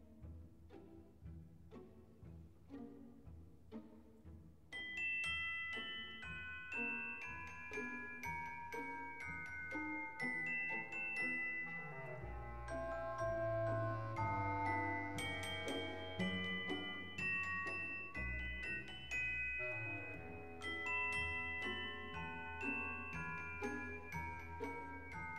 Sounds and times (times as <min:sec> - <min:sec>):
Glockenspiel: 0:00.0 - 0:25.3
Marimba, xylophone: 0:04.7 - 0:25.3.